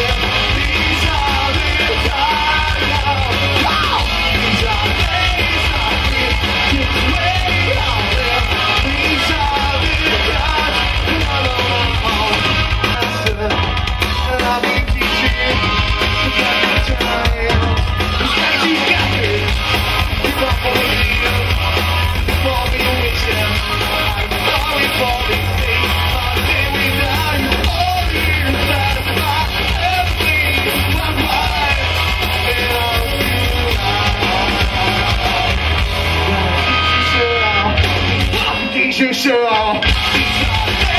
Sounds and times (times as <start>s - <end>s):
Punk rock: 0.0s - 40.9s
Singing: 0.0s - 40.9s.